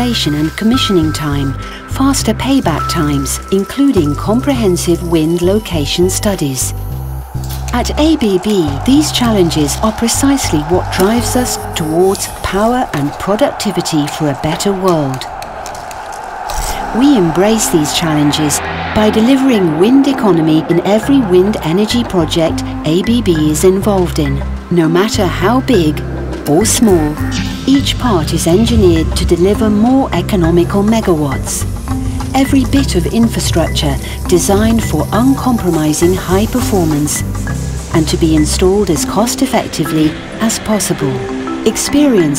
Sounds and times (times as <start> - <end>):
Speech: 0.0 - 6.8, 7.7 - 15.3, 16.6 - 31.7, 32.4 - 37.2, 37.9 - 42.3
Music: 0.0 - 42.3.